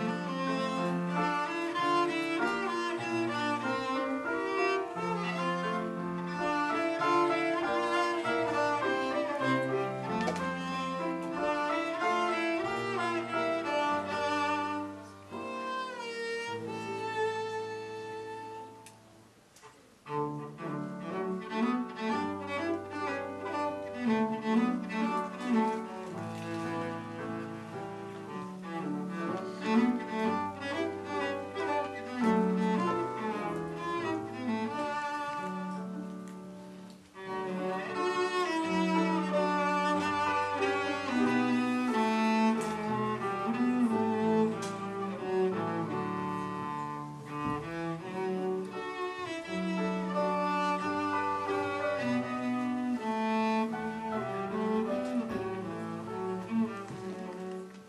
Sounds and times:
Cello: 0.0s - 57.8s.

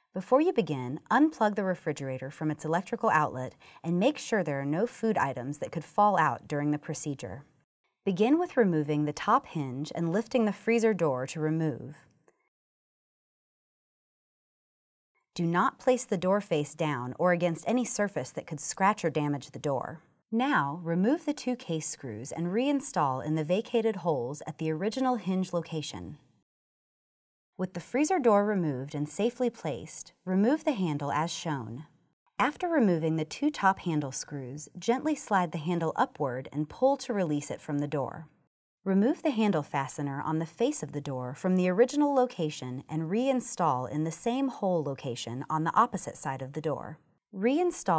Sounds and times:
Speech: 0.2s - 7.5s, 8.1s - 12.1s, 15.4s - 26.2s, 27.6s - 38.3s, 38.9s - 47.9s.

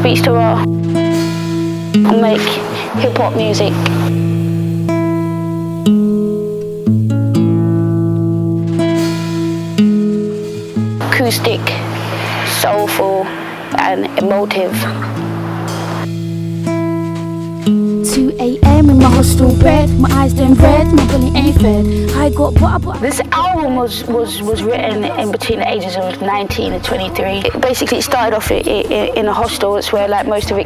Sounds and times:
Female speech, woman speaking: 0.0s - 0.7s, 2.0s - 4.1s, 11.0s - 15.1s, 18.1s - 30.6s
Narration, monologue: 0.0s - 6.4s, 16.0s - 30.6s
Music: 0.0s - 30.6s.

